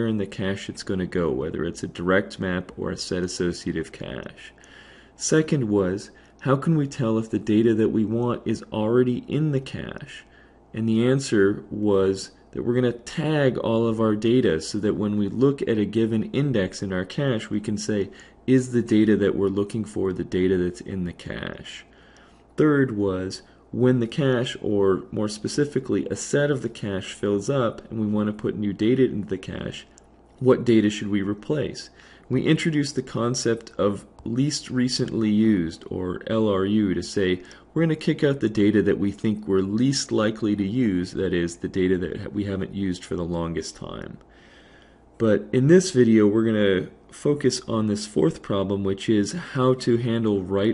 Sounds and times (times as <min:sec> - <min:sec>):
Speech: 0:00.0 - 0:04.6, 0:05.2 - 0:22.0, 0:22.6 - 0:44.3, 0:45.2 - 0:50.7.